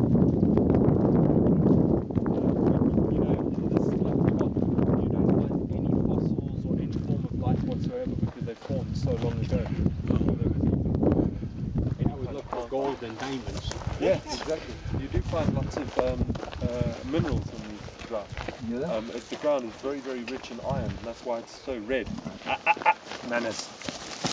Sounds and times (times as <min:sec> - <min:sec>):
Speech: 0:02.5 - 0:10.7, 0:12.0 - 0:22.1, 0:23.2 - 0:23.7.